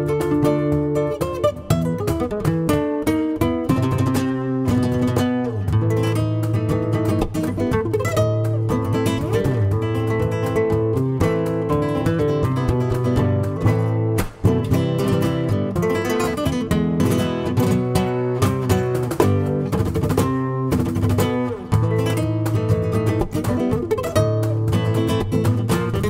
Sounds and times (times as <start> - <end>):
Flamenco: 0.0 - 26.1
Guitar: 0.0 - 26.1.